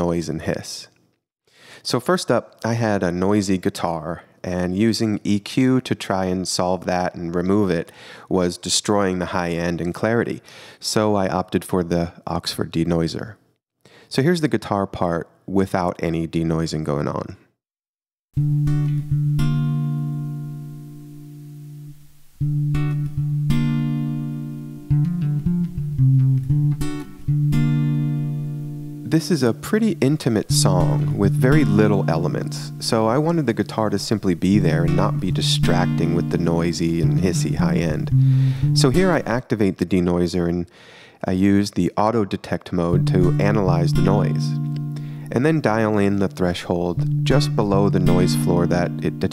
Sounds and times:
Speech: 0:00.0 - 0:01.0, 0:01.8 - 0:13.4, 0:14.1 - 0:17.5, 0:29.1 - 0:38.1, 0:38.8 - 0:44.6, 0:45.3 - 0:49.3.

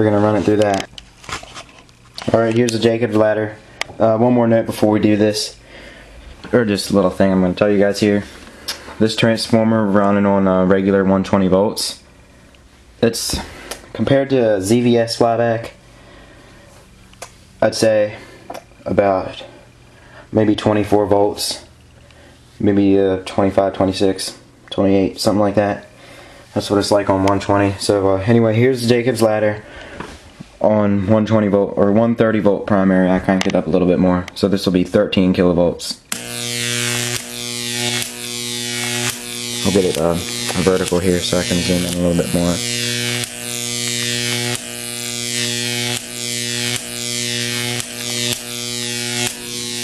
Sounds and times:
Speech: 0:00.0 - 0:00.9, 0:02.2 - 0:05.6, 0:06.5 - 0:08.3, 0:09.0 - 0:12.0, 0:13.0 - 0:15.8, 0:17.6 - 0:19.5, 0:20.3 - 0:21.7, 0:22.6 - 0:25.9, 0:26.6 - 0:29.6, 0:30.6 - 0:36.0, 0:39.6 - 0:42.6.

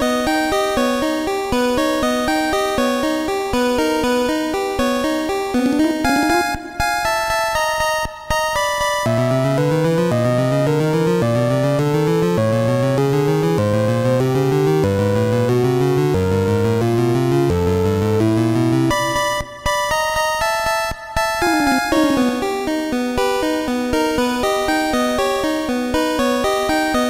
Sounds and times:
Music: 0:00.0 - 0:27.1.

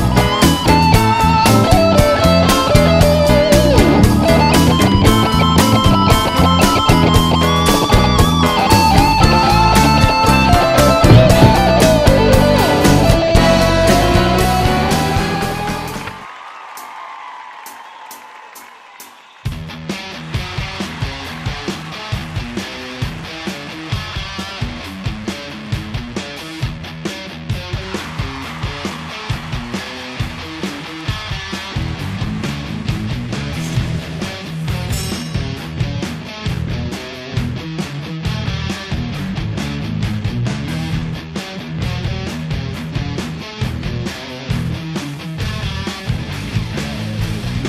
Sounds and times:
Bass guitar: 0:00.0 - 0:16.2, 0:19.5 - 0:47.6
Electric guitar: 0:00.0 - 0:16.2, 0:19.6 - 0:47.6.

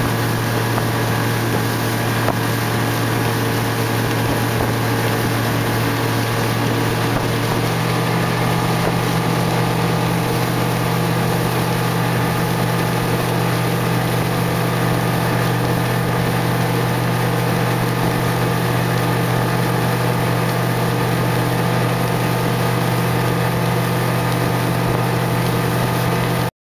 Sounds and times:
Sailboat, sailing ship: 0:00.0 - 0:26.5.

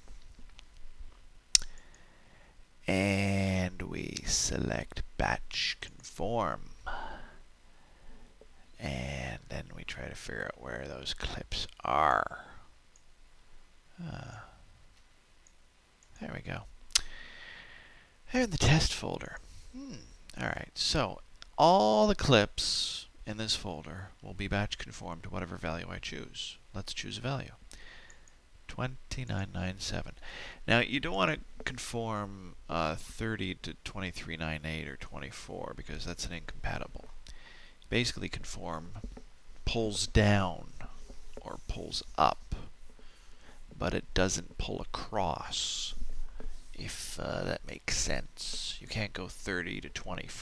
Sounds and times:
Speech: 0:02.8 - 0:06.8, 0:08.8 - 0:12.6, 0:14.0 - 0:14.5, 0:16.2 - 0:16.7, 0:18.3 - 0:27.6, 0:28.7 - 0:37.1, 0:37.9 - 0:42.7, 0:43.8 - 0:46.0, 0:46.8 - 0:50.4.

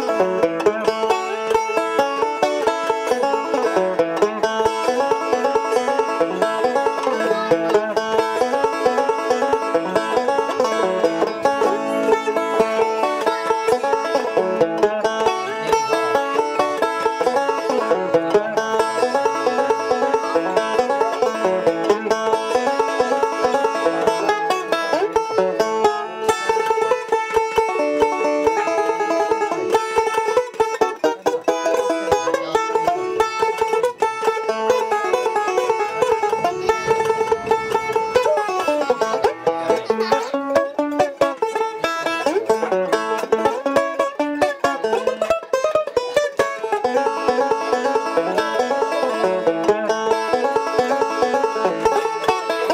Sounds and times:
Banjo: 0:00.0 - 0:52.7
Country: 0:00.0 - 0:52.7.

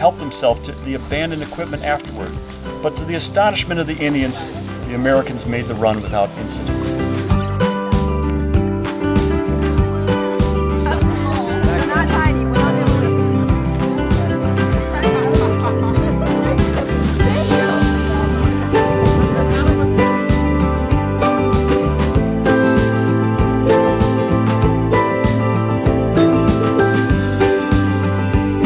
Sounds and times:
Speech: 0:00.0 - 0:07.0
Music: 0:00.0 - 0:28.6.

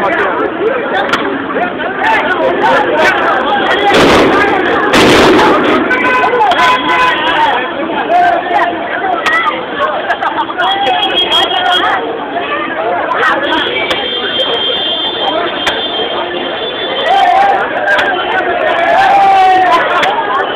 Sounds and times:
Speech: 0:00.0 - 0:20.5.

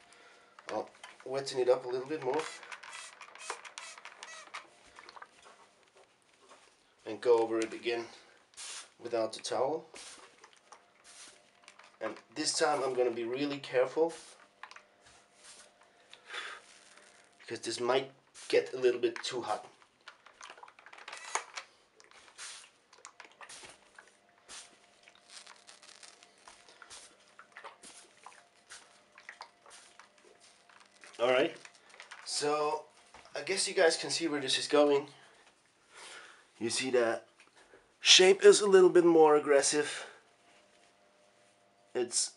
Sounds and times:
Speech: 0:00.7 - 0:02.5, 0:07.0 - 0:08.2, 0:09.0 - 0:09.9, 0:12.0 - 0:14.2, 0:17.5 - 0:19.7, 0:31.2 - 0:31.6, 0:32.3 - 0:35.2, 0:36.6 - 0:37.3, 0:38.0 - 0:40.2, 0:41.9 - 0:42.3.

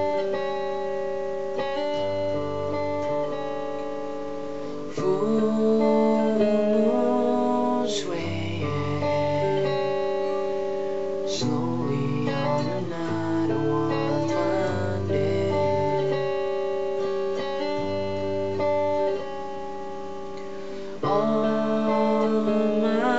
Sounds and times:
Music: 0:00.0 - 0:23.1.

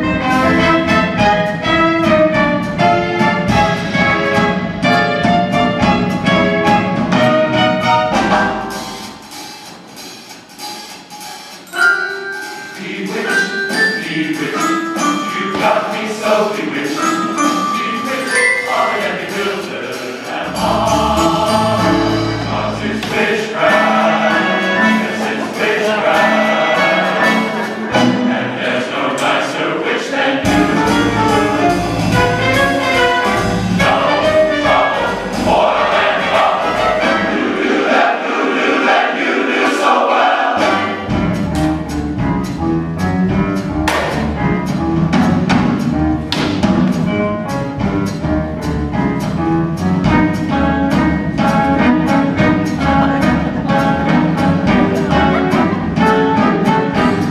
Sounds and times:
Music: 0:00.0 - 0:57.3.

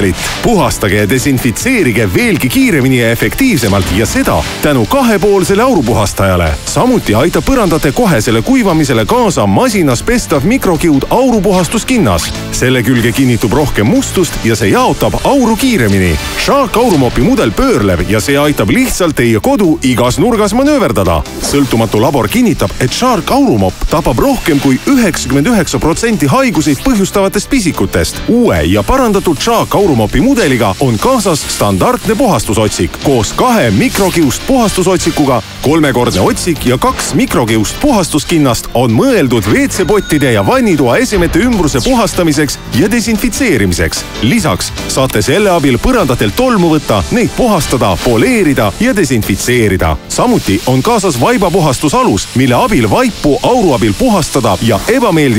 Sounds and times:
Music: 0:00.0 - 0:55.3
Speech: 0:00.0 - 0:55.3.

